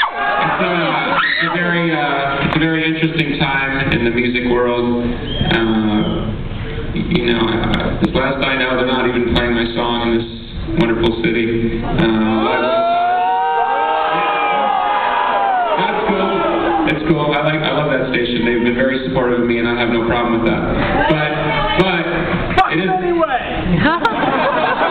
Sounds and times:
Male speech, man speaking: 0.4s - 6.3s, 7.0s - 12.8s, 15.8s - 23.6s.

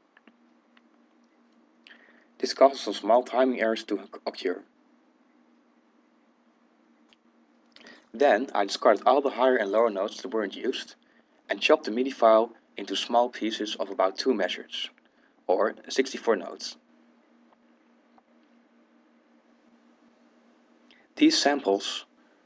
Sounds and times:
Speech: 2.4s - 4.7s, 8.1s - 16.8s, 21.2s - 22.1s.

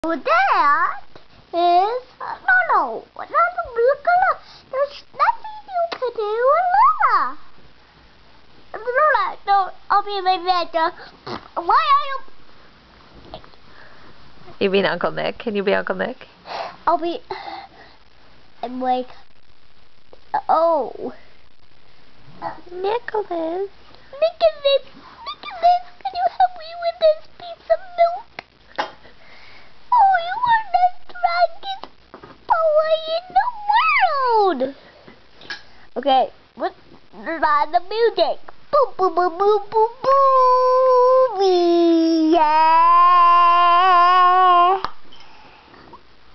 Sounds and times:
Child speech, kid speaking: 0.0s - 7.4s, 8.7s - 12.3s, 16.9s - 17.3s, 18.6s - 19.2s, 20.3s - 21.3s, 22.4s - 28.3s, 29.9s - 31.9s, 32.5s - 34.8s, 36.0s - 44.8s
Inside, small room: 0.0s - 46.3s.

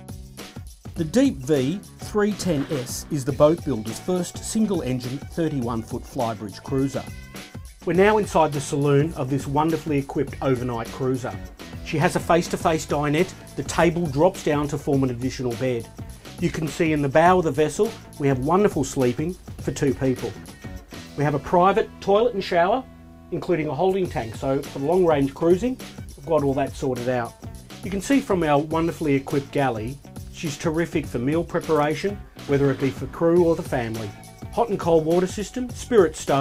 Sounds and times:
Music: 0.0s - 36.4s
Speech: 1.0s - 7.2s, 7.8s - 20.5s, 21.2s - 36.4s.

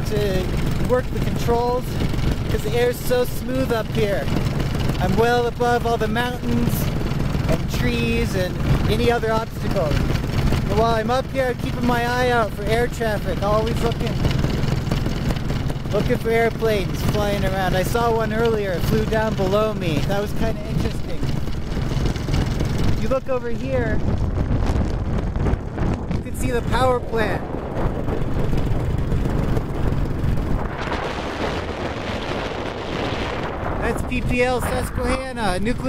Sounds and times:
Speech: 0.0s - 4.3s, 5.0s - 6.9s, 7.5s - 10.0s, 10.7s - 14.2s, 15.9s - 21.3s, 23.0s - 24.0s, 26.2s - 27.5s, 33.8s - 35.8s.

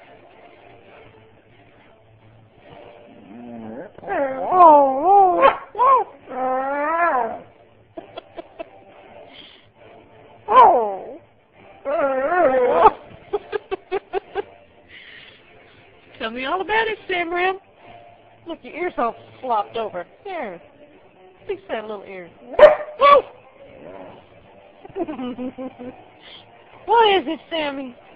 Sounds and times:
Music: 0.0s - 28.1s
Canidae, dogs, wolves: 3.0s - 7.6s, 10.4s - 11.2s, 22.5s - 24.3s
Dog: 22.6s - 23.4s.

